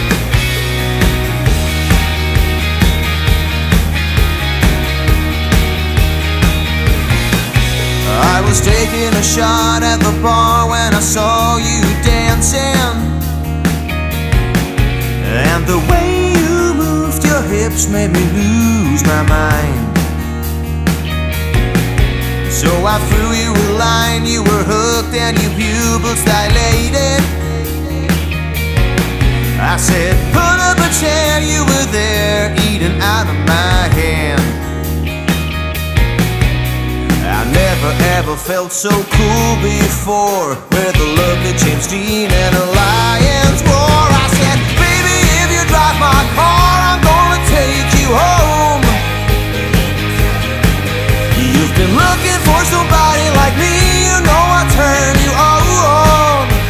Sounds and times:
Music: 0.0s - 56.7s.

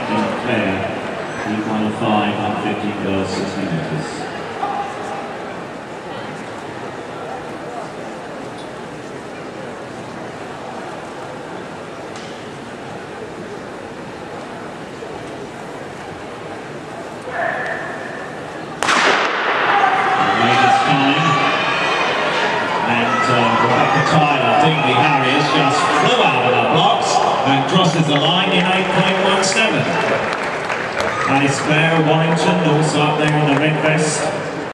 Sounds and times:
Speech: 0.0s - 4.3s, 20.2s - 21.5s, 22.8s - 30.1s, 31.3s - 34.6s
Inside, public space: 0.0s - 34.7s.

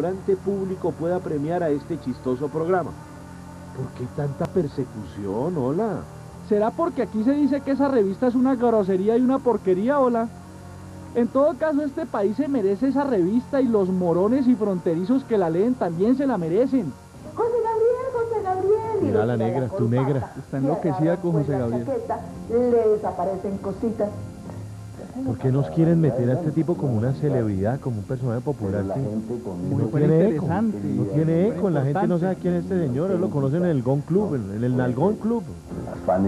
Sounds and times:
Television: 0.0s - 36.2s
Speech: 11.2s - 23.6s, 25.0s - 36.2s.

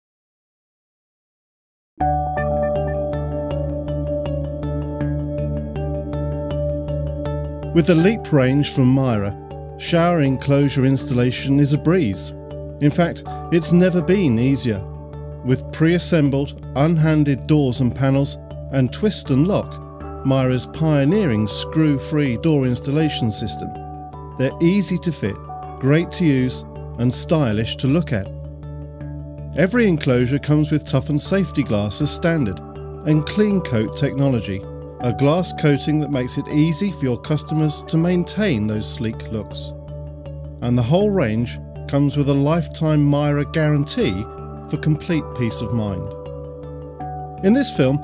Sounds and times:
Music: 2.0s - 48.0s
Speech: 7.7s - 23.8s, 24.4s - 28.3s, 29.6s - 39.7s, 40.6s - 46.1s, 47.4s - 48.0s.

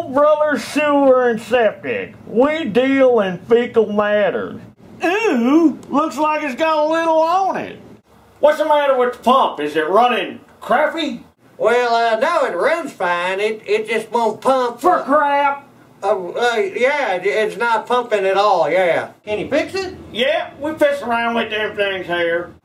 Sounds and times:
Speech: 0.0s - 7.8s, 8.4s - 22.6s.

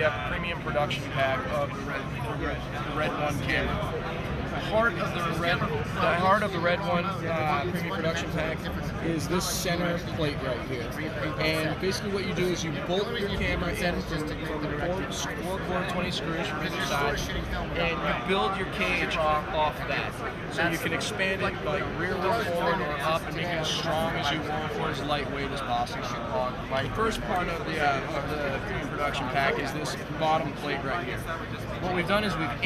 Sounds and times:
Speech: 0.0s - 32.6s.

